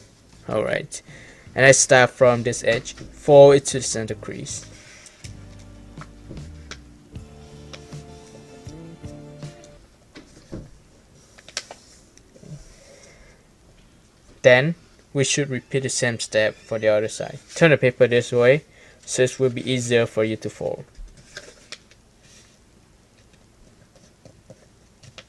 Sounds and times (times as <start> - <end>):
Speech: 0.4 - 4.7, 14.4 - 20.9.